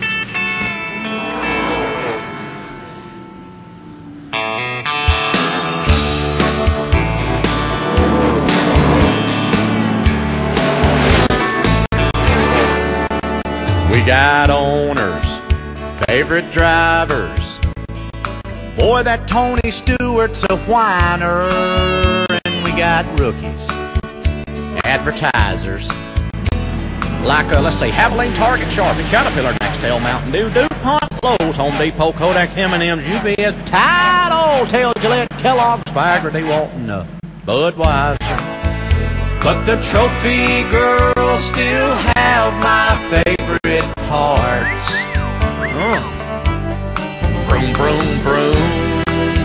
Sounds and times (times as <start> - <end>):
Speech: 24.8 - 25.9, 27.2 - 38.4, 45.7 - 46.1.